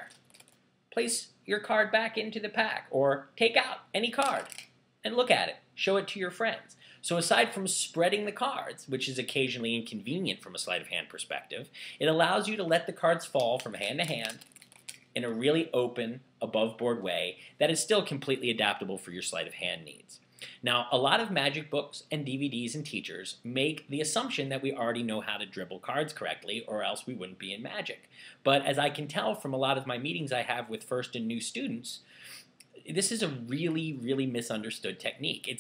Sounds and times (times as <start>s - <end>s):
Speech: 1.0s - 14.4s, 15.2s - 35.6s.